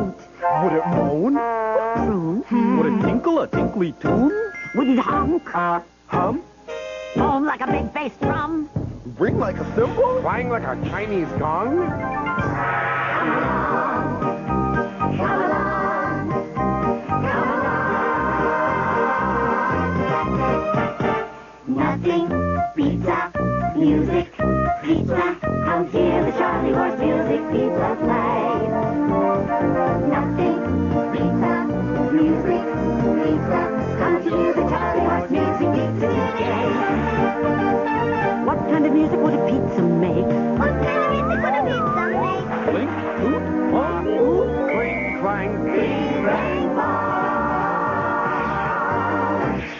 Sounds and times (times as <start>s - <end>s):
Music: 0.0s - 49.7s.